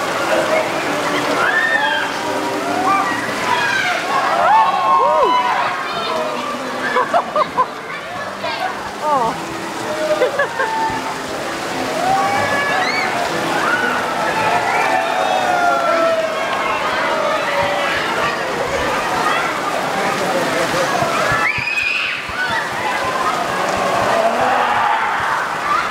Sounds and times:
Rain on surface: 0:00.0 - 0:25.9.

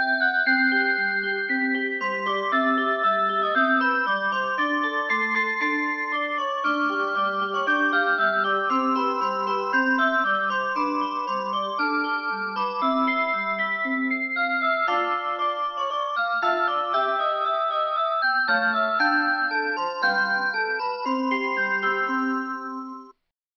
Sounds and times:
Music: 0:00.0 - 0:23.2.

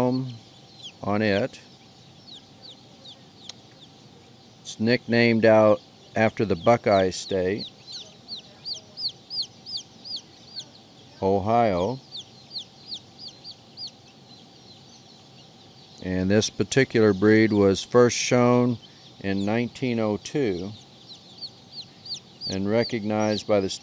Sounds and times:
Speech: 0:00.0 - 0:00.4, 0:01.0 - 0:01.7, 0:04.7 - 0:09.1, 0:10.5 - 0:12.0, 0:16.0 - 0:20.8, 0:22.5 - 0:23.8.

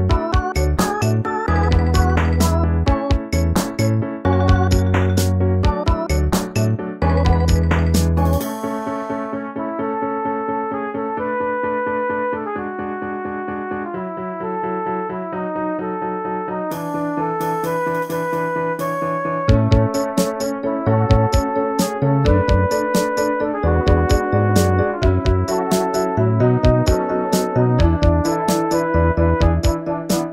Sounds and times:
Video game music: 0:00.0 - 0:30.3.

